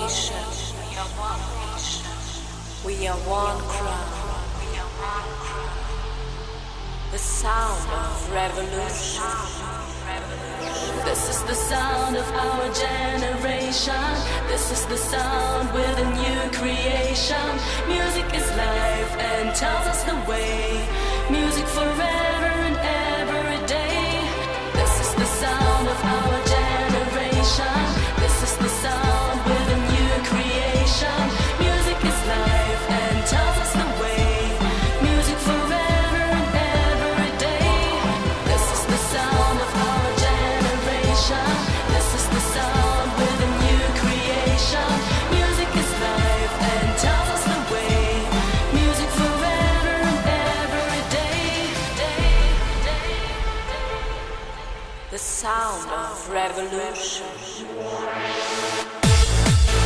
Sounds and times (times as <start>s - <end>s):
Music: 0.0s - 59.8s.